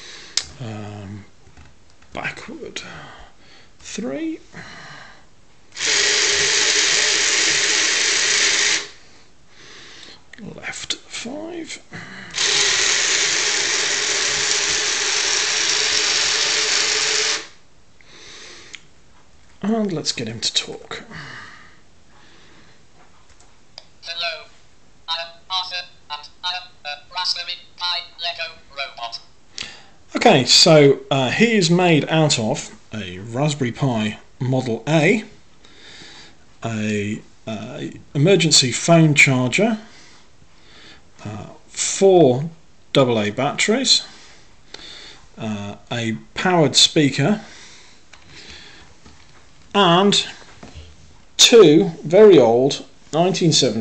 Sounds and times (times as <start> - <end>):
Narration, monologue: 0.0 - 53.8
Male speech, man speaking: 2.2 - 2.9, 3.9 - 4.4, 10.4 - 11.9, 19.6 - 21.1, 25.1 - 29.3, 30.2 - 35.3, 36.6 - 39.9, 41.2 - 44.1, 45.4 - 47.5, 49.8 - 50.4, 51.4 - 53.8.